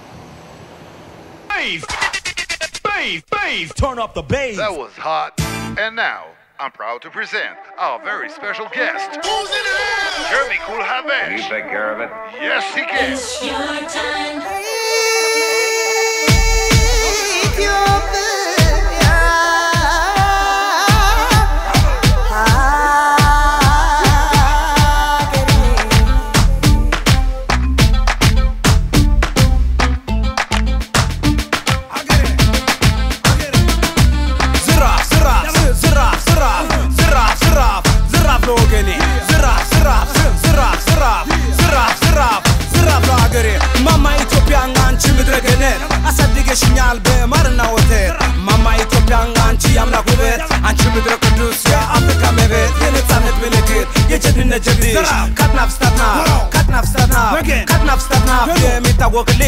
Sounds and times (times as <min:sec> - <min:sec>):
Music: 0:05.4 - 0:05.8, 0:07.4 - 0:59.4.